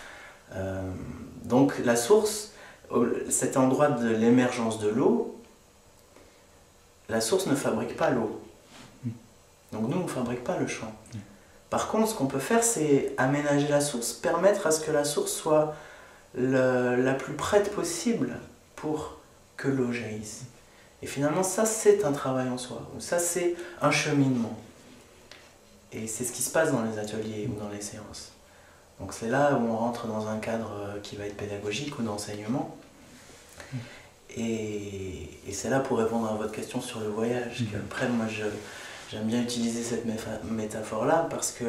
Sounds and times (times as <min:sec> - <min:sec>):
Speech: 0:00.5 - 0:05.5, 0:07.1 - 0:24.8, 0:25.9 - 0:28.4, 0:29.0 - 0:32.9, 0:34.3 - 0:41.6.